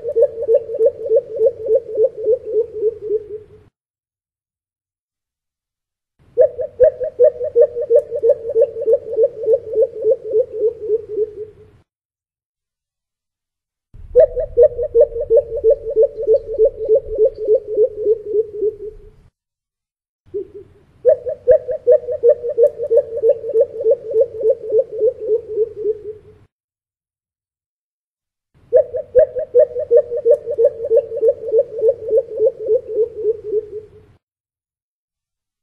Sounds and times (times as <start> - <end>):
Bird vocalization, bird call, bird song: 0.0 - 3.6, 14.0 - 19.1, 20.3 - 26.4, 28.7 - 34.0.